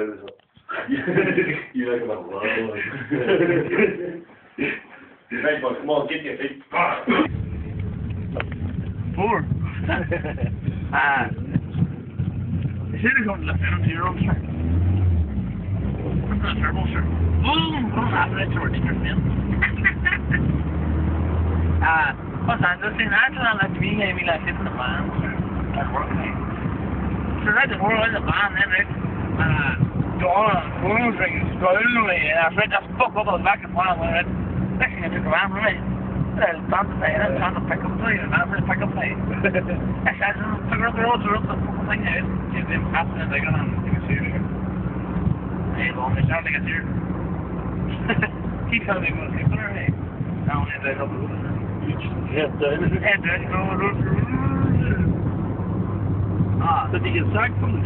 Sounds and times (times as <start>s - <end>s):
Speech: 0.0s - 1.1s, 1.7s - 3.0s, 4.6s - 7.3s, 10.9s - 11.6s, 12.9s - 14.4s, 16.3s - 20.0s, 21.8s - 26.4s, 27.4s - 35.8s, 36.4s - 44.4s, 45.8s - 46.8s, 48.7s - 55.1s, 56.6s - 57.8s
Car: 6.8s - 57.8s.